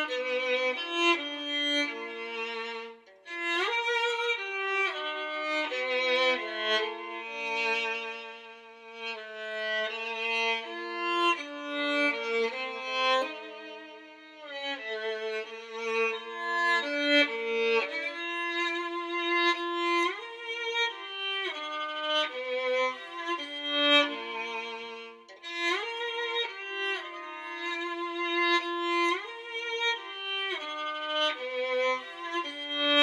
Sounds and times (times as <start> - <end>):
Violin, fiddle: 0.0 - 33.0.